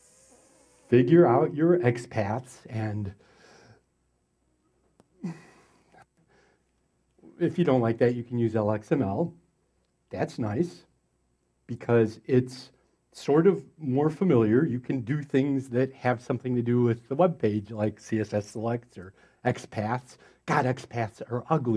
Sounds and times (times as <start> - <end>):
Speech: 0.9 - 3.2, 7.3 - 9.4, 10.1 - 10.9, 11.7 - 21.7.